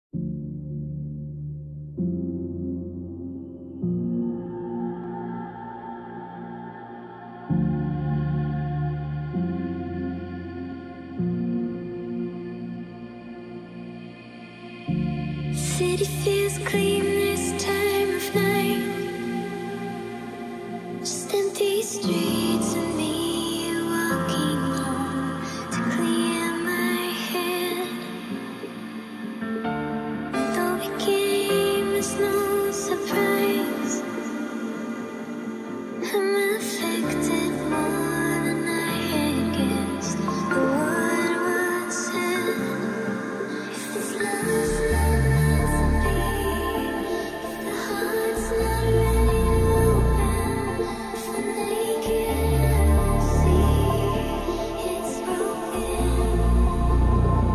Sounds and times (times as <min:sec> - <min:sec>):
Ambient music: 0:00.1 - 0:57.5.